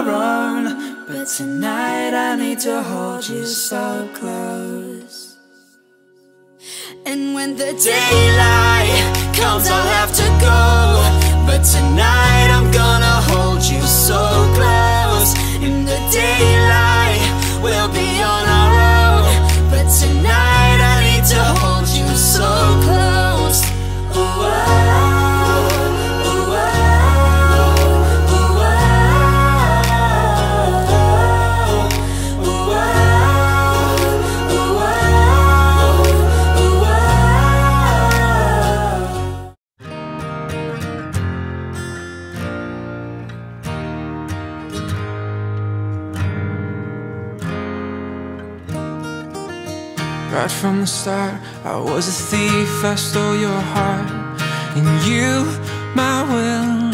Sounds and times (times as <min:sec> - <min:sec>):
Rhythm and blues: 0:07.6 - 0:39.6.